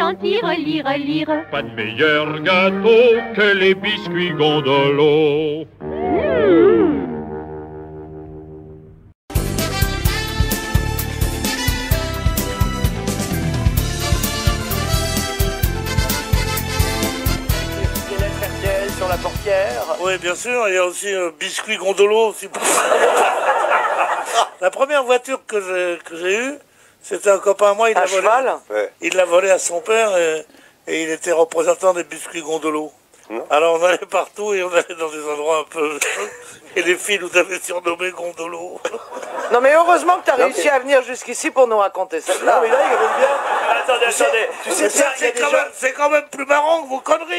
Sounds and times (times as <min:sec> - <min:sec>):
Music: 0:00.1 - 0:05.1, 0:05.8 - 0:20.4
Speech: 0:17.8 - 0:22.6, 0:24.5 - 0:36.1, 0:36.8 - 0:38.9, 0:39.5 - 0:47.3.